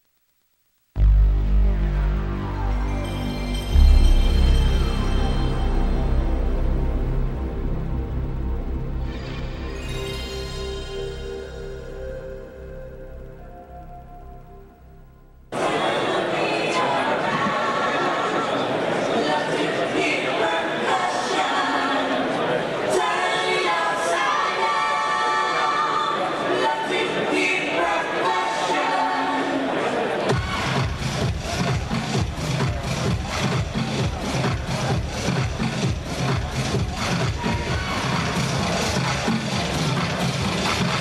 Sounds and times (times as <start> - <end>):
Music: 1.0 - 15.6, 30.2 - 41.0.